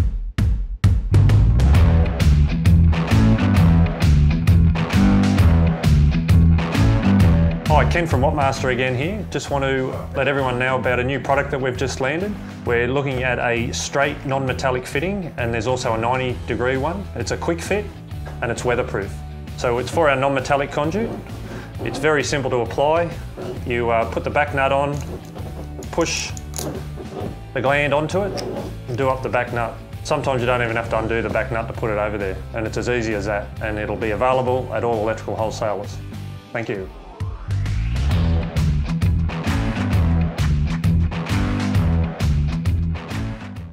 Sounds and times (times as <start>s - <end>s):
Music: 0.0s - 43.7s
Speech: 7.7s - 21.2s, 21.8s - 25.1s, 25.9s - 26.4s, 27.6s - 37.0s.